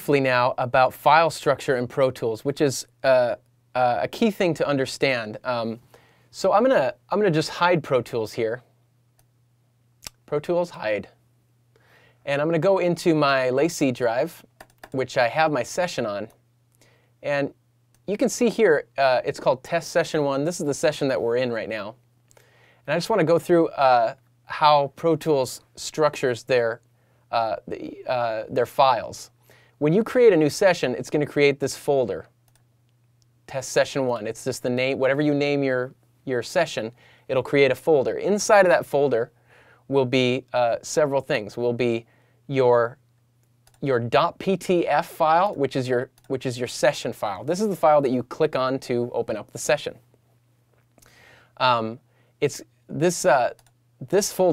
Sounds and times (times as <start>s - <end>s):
Speech: 0.0s - 8.7s, 10.1s - 11.2s, 12.2s - 16.4s, 17.2s - 22.0s, 22.9s - 32.3s, 33.5s - 43.0s, 43.8s - 50.0s, 51.6s - 54.5s.